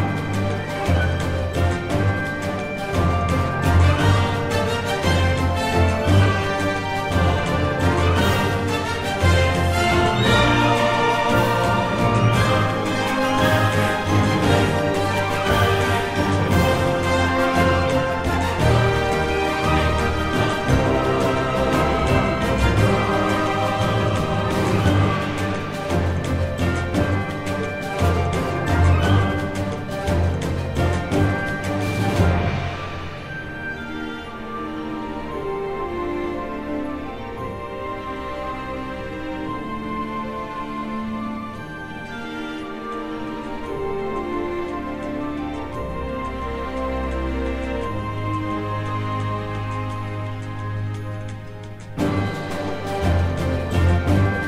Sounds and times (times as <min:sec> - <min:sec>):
Orchestra: 0:00.0 - 0:54.4.